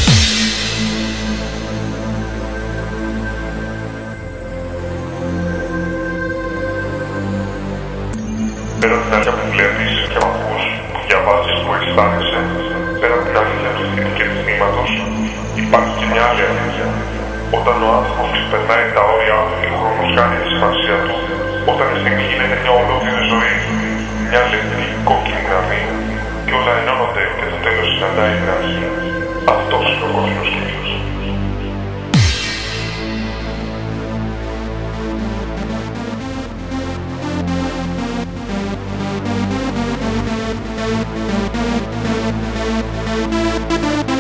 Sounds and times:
Electronic music: 0.0 - 44.2
Speech: 8.8 - 31.2.

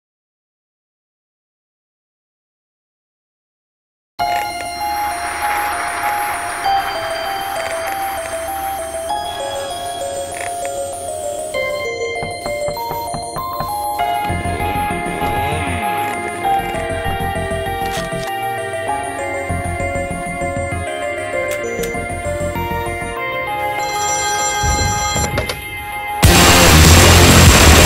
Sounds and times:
Music: 4.2 - 27.8.

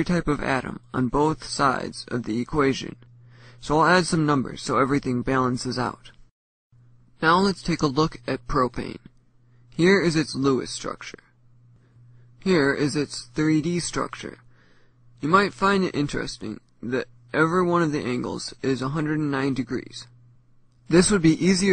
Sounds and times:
Narration, monologue: 0.0 - 21.7.

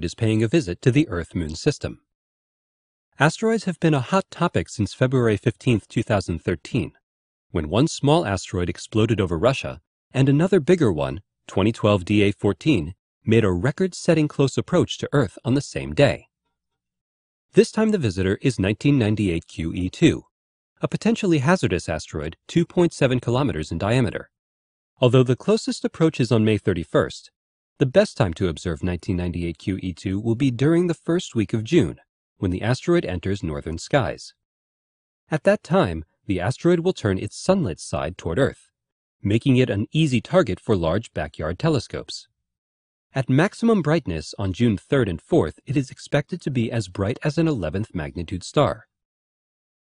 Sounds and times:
Speech: 0.0 - 2.1, 3.2 - 16.3, 17.6 - 24.3, 25.0 - 34.4, 35.3 - 42.3, 43.2 - 48.9.

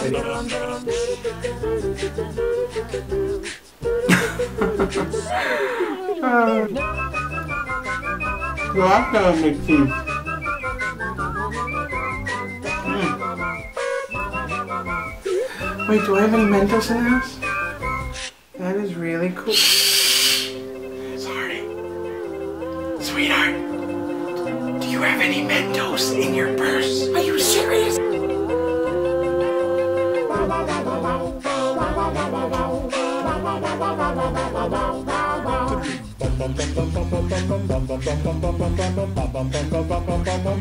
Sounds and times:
Inside, small room: 0.0 - 40.6
Music: 0.0 - 40.6.

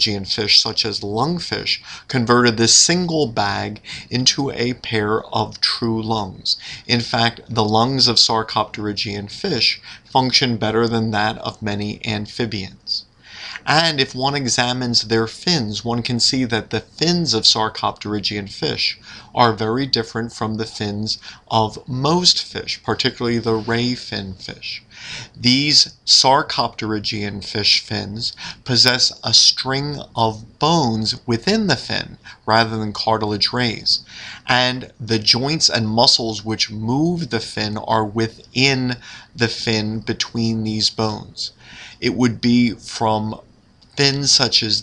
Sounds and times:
Speech: 0.0 - 44.8.

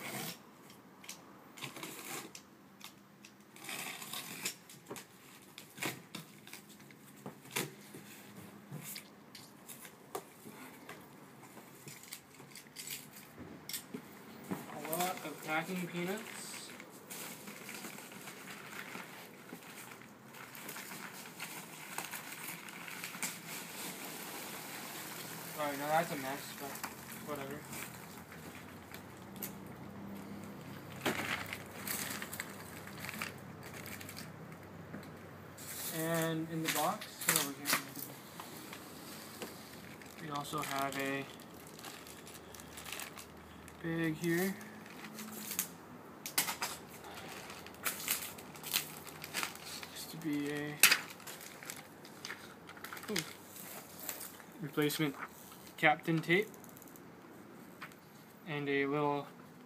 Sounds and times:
Speech: 14.7 - 16.8, 25.6 - 27.7, 35.9 - 38.0, 40.2 - 41.4, 43.8 - 44.6, 49.9 - 50.8, 54.6 - 55.2, 55.8 - 56.5, 58.5 - 59.3.

